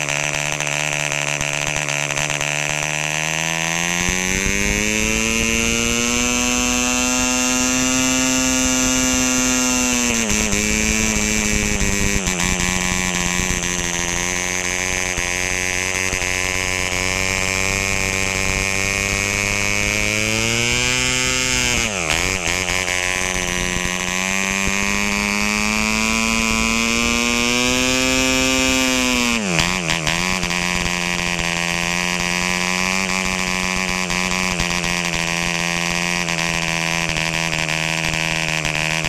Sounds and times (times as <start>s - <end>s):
Engine: 0.0s - 39.0s.